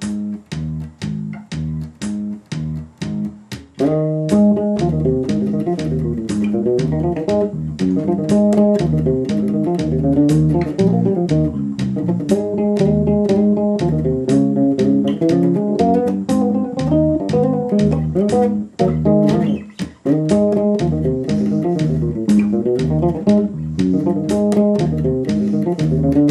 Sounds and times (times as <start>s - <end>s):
Bass guitar: 0.0s - 26.3s
Electric guitar: 0.0s - 26.3s.